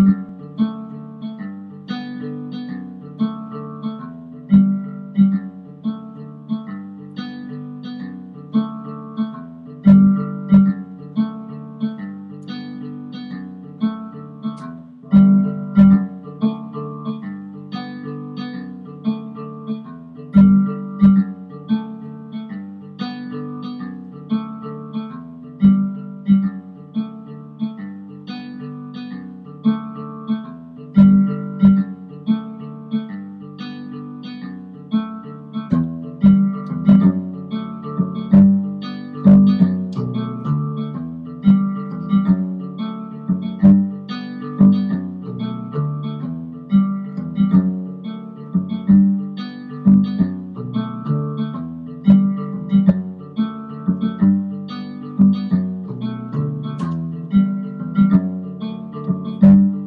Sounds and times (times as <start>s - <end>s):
Guitar: 0.0s - 59.8s.